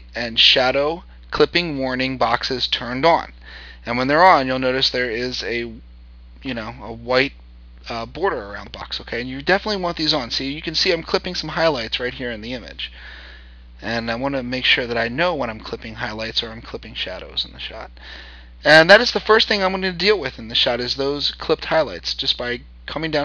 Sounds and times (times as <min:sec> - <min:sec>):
Speech: 0:00.0 - 0:05.8, 0:06.4 - 0:13.0, 0:13.8 - 0:18.0, 0:18.6 - 0:23.2.